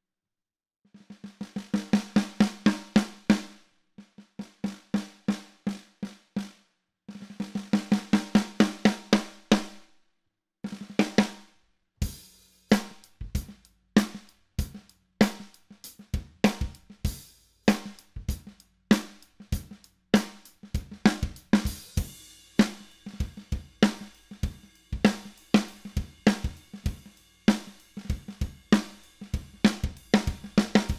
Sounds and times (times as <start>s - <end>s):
Drum kit: 1.0s - 9.8s, 10.7s - 30.9s
Drum: 1.1s - 9.7s, 10.7s - 11.4s, 12.0s - 30.9s.